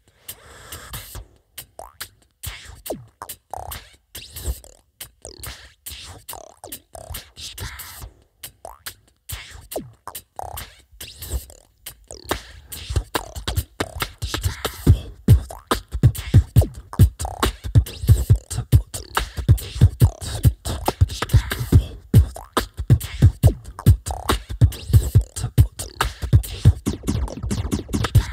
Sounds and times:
Beatboxing: 0.0 - 28.3.

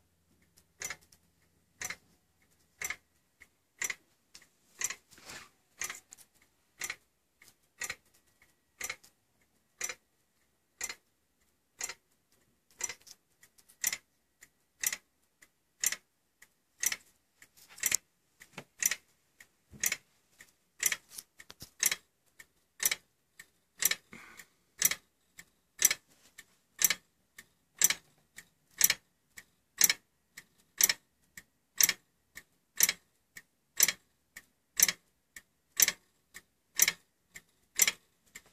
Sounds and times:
Tick-tock: 0.0 - 5.1, 5.8 - 38.5.

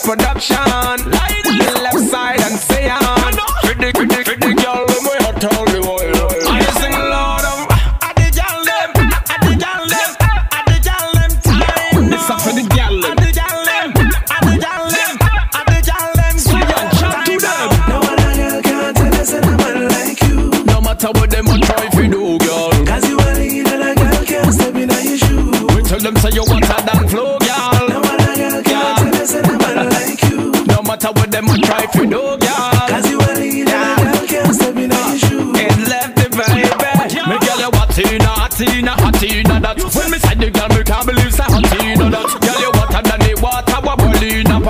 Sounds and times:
Music: 0.0 - 44.7.

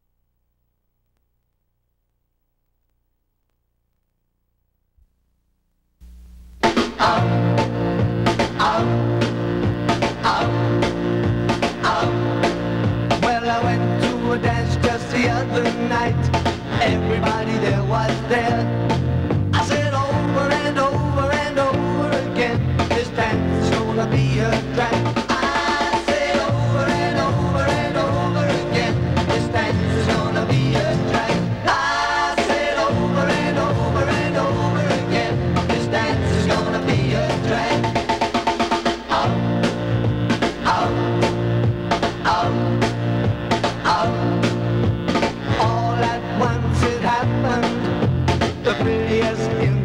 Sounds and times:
Music: 6.6 - 49.8.

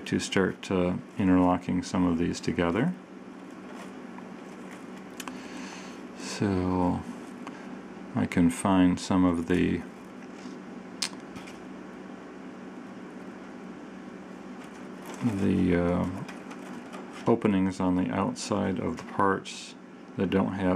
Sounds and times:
Speech: 0.0 - 3.0, 6.2 - 7.2, 8.1 - 9.9, 15.2 - 16.3, 17.2 - 20.7
Inside, small room: 0.0 - 20.7.

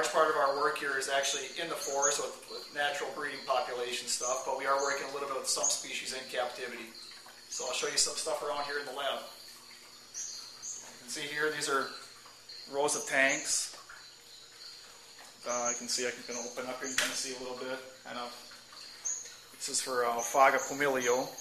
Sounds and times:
Speech: 0.0 - 7.0, 7.6 - 9.3, 11.0 - 12.0, 12.7 - 13.8, 15.4 - 18.4, 19.6 - 21.4.

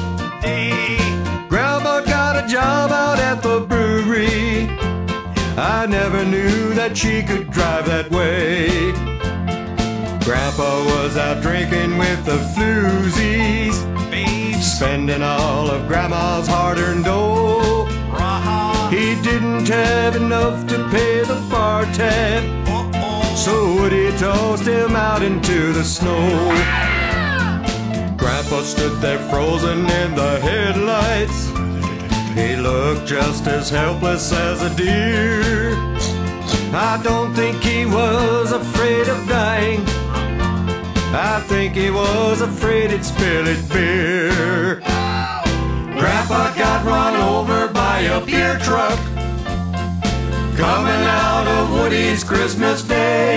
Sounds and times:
Music: 0.0 - 53.3.

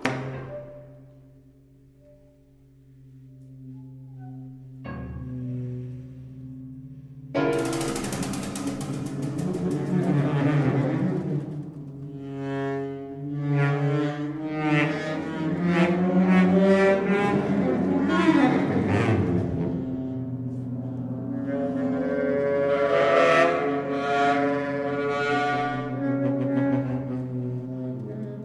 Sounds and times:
Music: 0.0 - 28.4.

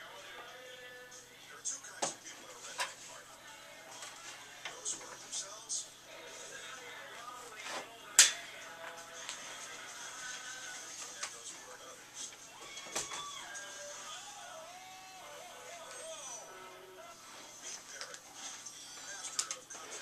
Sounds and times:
Music: 0.0 - 20.0
Speech: 1.2 - 9.9, 10.6 - 12.4, 15.7 - 20.0.

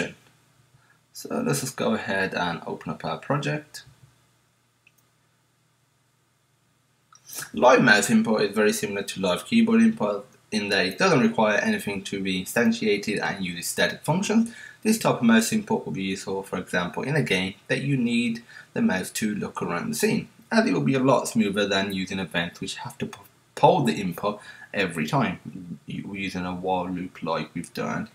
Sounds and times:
Speech: 0.0 - 0.2, 1.2 - 4.0, 7.3 - 28.1.

